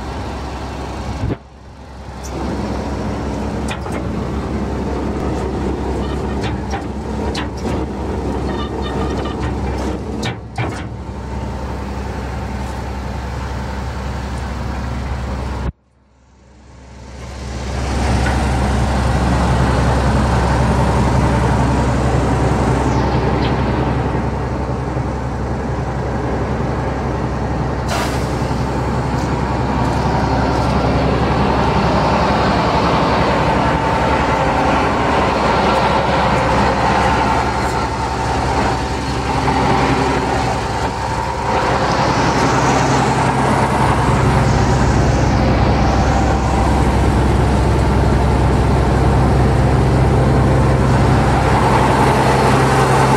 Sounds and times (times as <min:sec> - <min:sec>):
Vehicle: 0:00.0 - 0:53.1.